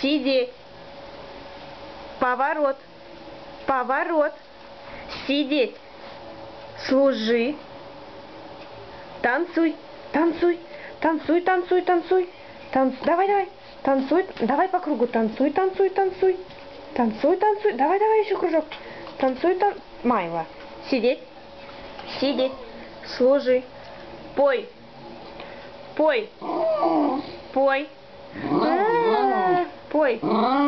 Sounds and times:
Speech: 0:00.0 - 0:00.6, 0:02.2 - 0:02.8, 0:03.7 - 0:04.4, 0:05.2 - 0:05.8, 0:06.8 - 0:07.6, 0:09.2 - 0:21.3, 0:22.1 - 0:23.7, 0:24.4 - 0:24.8, 0:26.0 - 0:26.3, 0:27.5 - 0:28.0, 0:28.7 - 0:30.3.

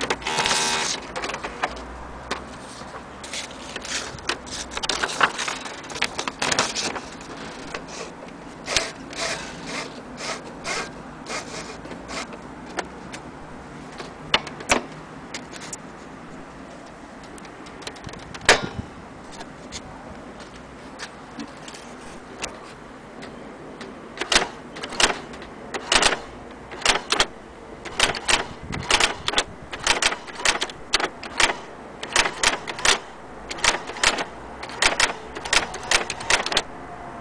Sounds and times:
Typewriter: 0:00.0 - 0:01.8, 0:03.3 - 0:08.1, 0:24.2 - 0:36.7.

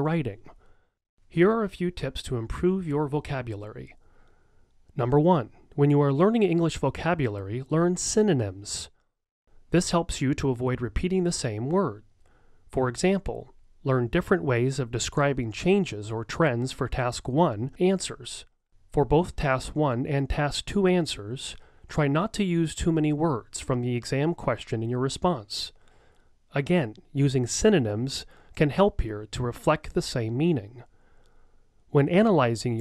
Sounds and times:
Speech: 0:00.0 - 0:00.6, 0:01.3 - 0:04.0, 0:05.0 - 0:08.9, 0:09.7 - 0:12.0, 0:12.8 - 0:25.8, 0:26.5 - 0:30.9, 0:31.9 - 0:32.8.

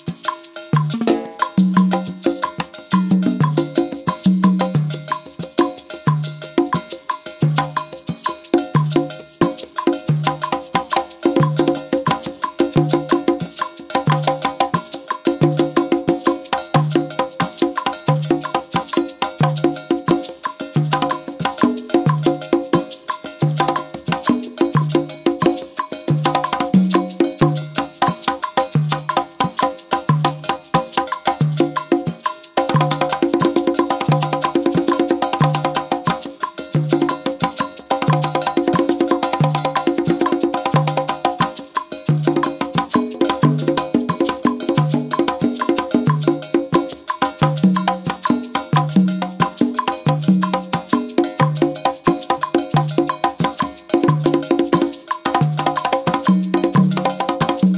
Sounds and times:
Wood block: 0:00.0 - 0:57.7.

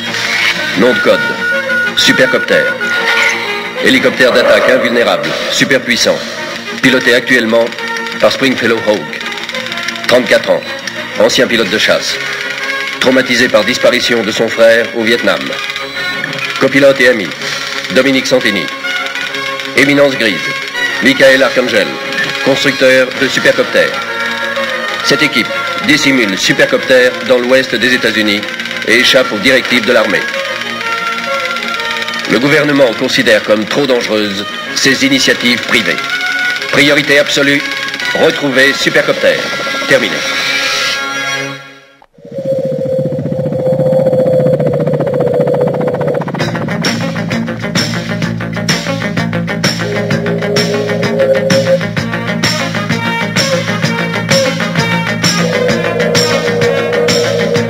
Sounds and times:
Music: 0:00.0 - 0:42.1, 0:45.4 - 0:57.6
Speech: 0:03.8 - 0:06.2, 0:06.9 - 0:09.1, 0:10.1 - 0:12.2, 0:13.0 - 0:15.6, 0:16.6 - 0:18.7, 0:19.8 - 0:24.0, 0:25.1 - 0:30.3, 0:32.3 - 0:36.0, 0:36.8 - 0:37.6, 0:38.2 - 0:40.3.

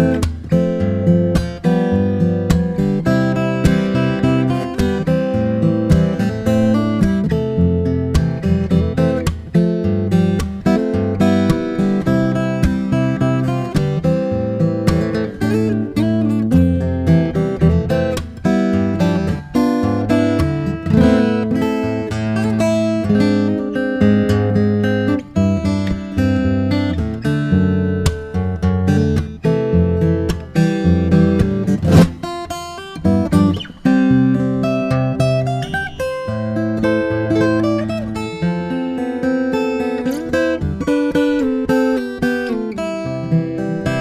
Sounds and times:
Acoustic guitar: 0:00.0 - 0:44.0
Strum: 0:00.0 - 0:44.0.

